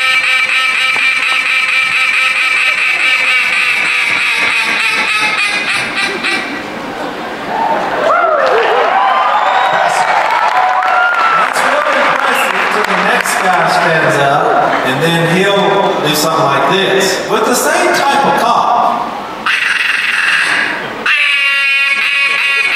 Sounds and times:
Quack: 0:00.0 - 0:06.6, 0:19.5 - 0:22.7
Speech: 0:11.4 - 0:19.0.

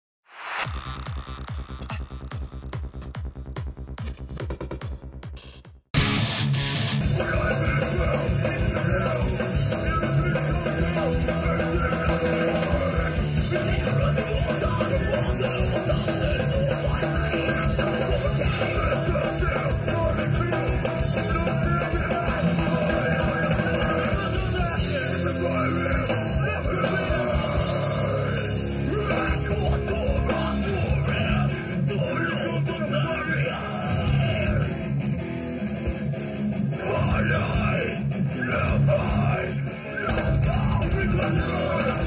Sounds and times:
Music: 0:00.4 - 0:42.0
Singing: 0:07.0 - 0:34.8, 0:36.7 - 0:42.0.

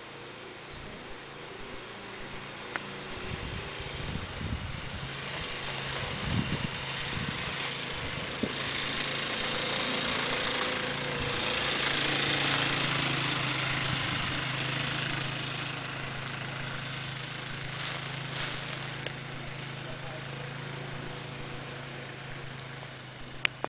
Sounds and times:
Outside, rural or natural: 0:00.0 - 0:23.6
Vehicle: 0:00.0 - 0:23.6.

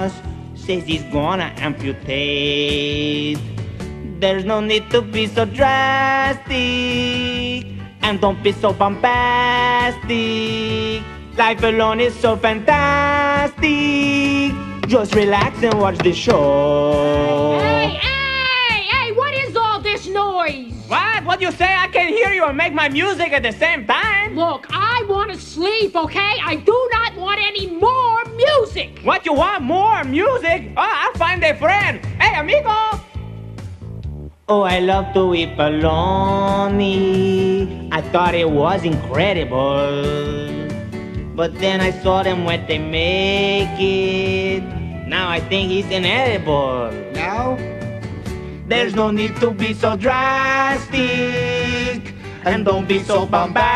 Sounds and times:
Music: 0:00.0 - 0:53.7.

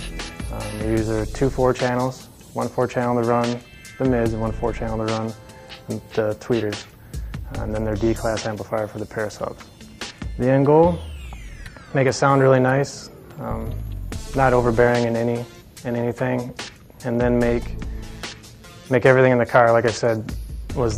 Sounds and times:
Music: 0:00.0 - 0:20.9
Speech: 0:00.5 - 0:06.8, 0:07.5 - 0:09.6, 0:10.4 - 0:11.0, 0:11.9 - 0:13.8, 0:14.4 - 0:17.7, 0:18.9 - 0:20.9.

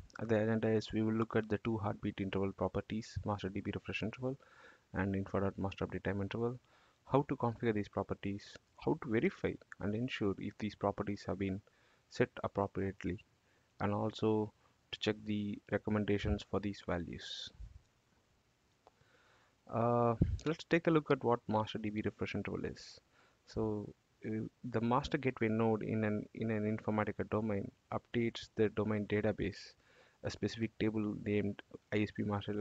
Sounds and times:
Speech: 0:00.1 - 0:17.6, 0:19.7 - 0:32.6.

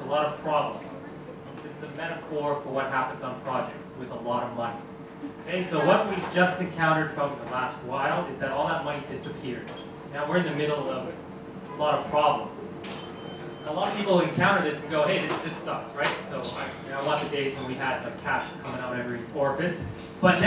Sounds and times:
Speech: 0:00.0 - 0:04.8, 0:05.4 - 0:12.7, 0:13.6 - 0:20.4.

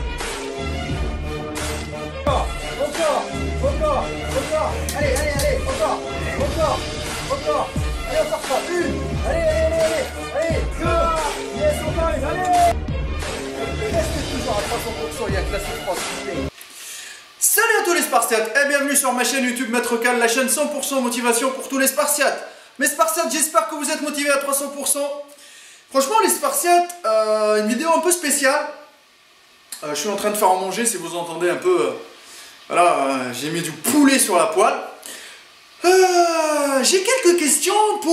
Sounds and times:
Speech: 0:02.3 - 0:12.8, 0:13.6 - 0:16.5, 0:17.4 - 0:25.3, 0:25.9 - 0:28.9, 0:29.8 - 0:32.1, 0:32.7 - 0:35.0, 0:35.8 - 0:38.1.

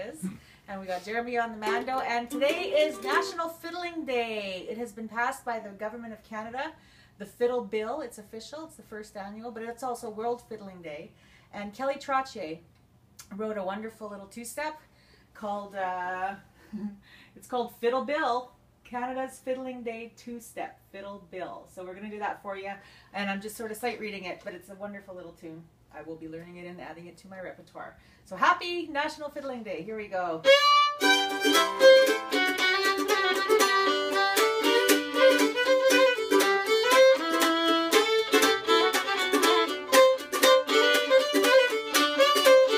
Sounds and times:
Speech: 0:00.0 - 0:12.6, 0:13.2 - 0:16.4, 0:17.4 - 0:30.5.

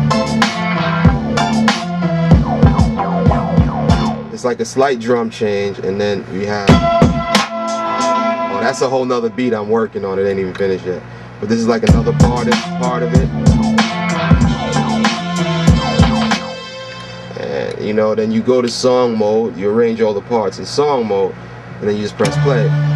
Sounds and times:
Music: 0:00.0 - 0:04.7, 0:06.4 - 0:10.7, 0:11.5 - 0:19.2, 0:22.1 - 0:22.9
Speech: 0:04.3 - 0:06.8, 0:08.5 - 0:13.3, 0:17.4 - 0:22.8.

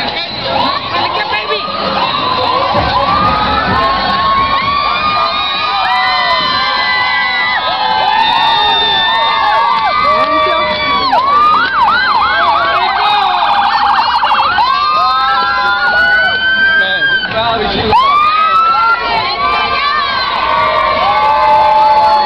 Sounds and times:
Police car (siren): 0:08.6 - 0:17.4, 0:18.0 - 0:19.1.

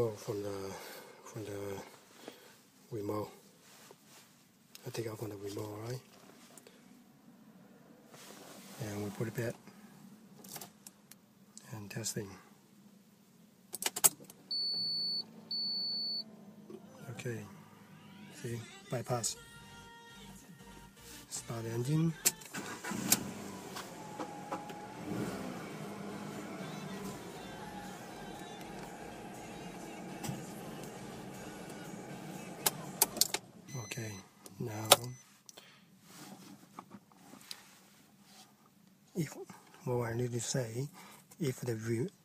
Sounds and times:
Speech: 0:00.0 - 0:01.9, 0:02.9 - 0:03.4, 0:04.8 - 0:06.1, 0:08.8 - 0:09.6, 0:11.6 - 0:12.5, 0:16.8 - 0:17.6, 0:18.3 - 0:19.4, 0:21.3 - 0:22.2, 0:33.7 - 0:35.2, 0:39.1 - 0:42.2
Music: 0:18.0 - 0:22.5, 0:25.9 - 0:33.3.

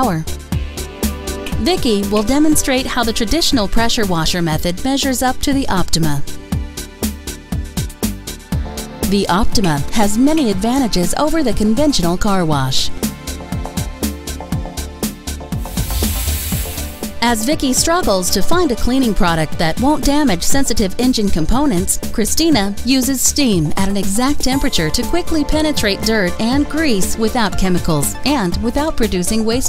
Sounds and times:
Speech: 0:00.0 - 0:00.3, 0:01.6 - 0:06.3, 0:09.0 - 0:13.0, 0:17.2 - 0:29.6
Music: 0:00.0 - 0:29.6.

